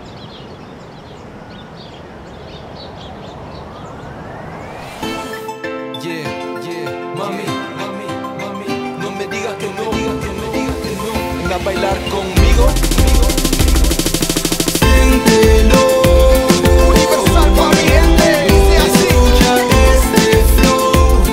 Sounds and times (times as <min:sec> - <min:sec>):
Music: 0:05.0 - 0:21.3.